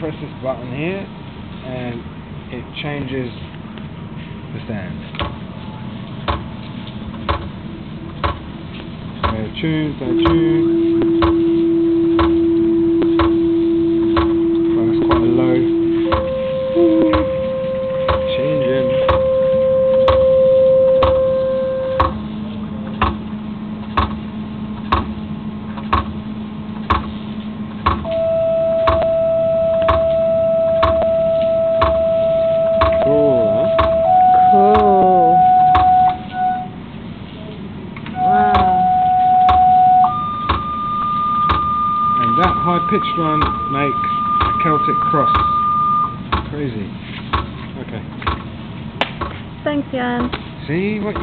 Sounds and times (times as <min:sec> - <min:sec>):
Speech: 0:00.0 - 0:03.4, 0:09.3 - 0:10.6, 0:34.6 - 0:35.4.